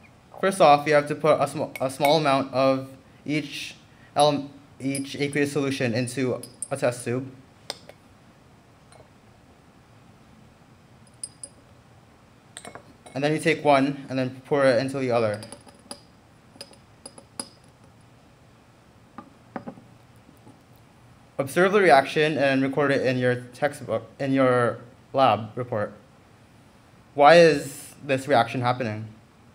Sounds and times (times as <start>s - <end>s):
Speech: 0.4s - 7.4s, 13.2s - 15.4s, 21.4s - 26.0s, 27.2s - 29.2s.